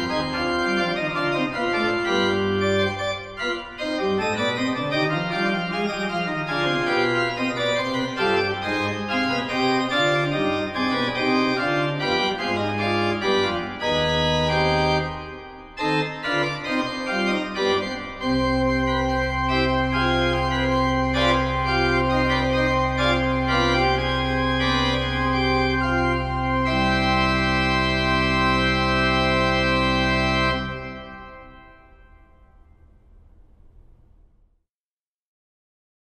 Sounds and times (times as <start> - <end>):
Organ: 0.0 - 33.0.